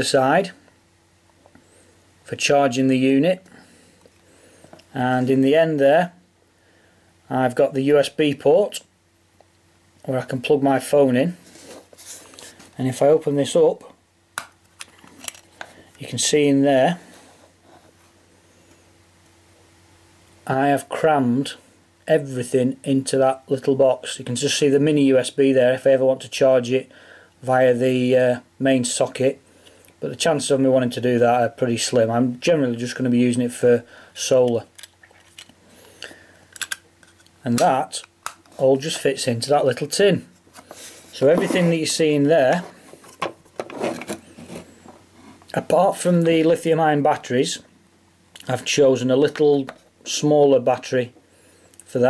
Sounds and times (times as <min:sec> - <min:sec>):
Speech: 0:00.0 - 0:00.6, 0:02.3 - 0:03.5, 0:04.9 - 0:06.2, 0:07.3 - 0:08.9, 0:10.0 - 0:11.4, 0:12.8 - 0:14.0, 0:16.0 - 0:17.1, 0:20.5 - 0:29.4, 0:30.0 - 0:34.7, 0:37.4 - 0:40.3, 0:41.1 - 0:42.8, 0:45.5 - 0:47.7, 0:48.4 - 0:51.2, 0:51.9 - 0:52.0
Inside, small room: 0:00.0 - 0:52.0.